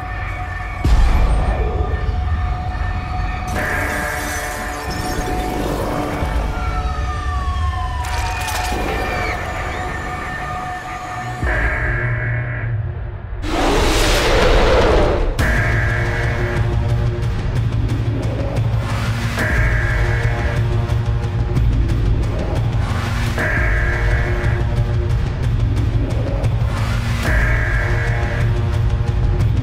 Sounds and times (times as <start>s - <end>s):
Music: 0.0s - 29.6s.